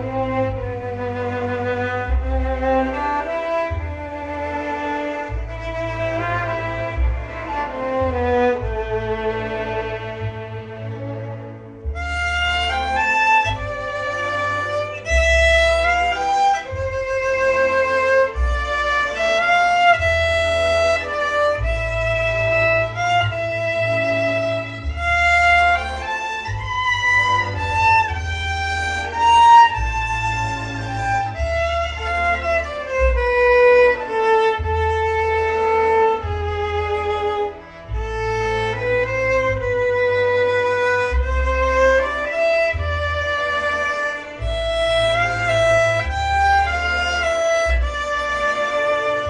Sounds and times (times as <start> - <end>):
Music: 0.0 - 49.2.